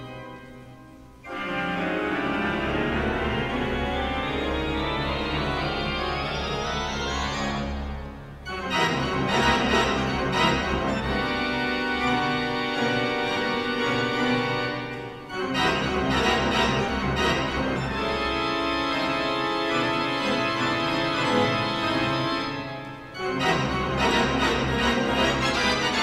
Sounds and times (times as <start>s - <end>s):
Piano: 0.0s - 26.0s.